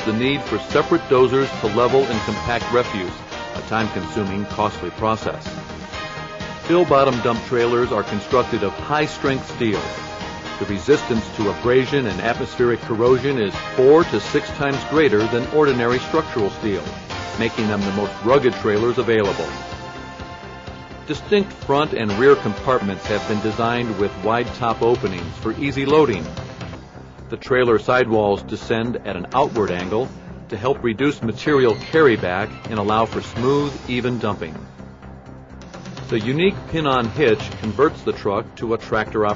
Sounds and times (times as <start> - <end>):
Speech: 0.0 - 5.5, 6.7 - 9.9, 10.6 - 19.6, 21.1 - 26.3, 27.3 - 34.6, 36.1 - 39.3
Music: 0.0 - 39.3.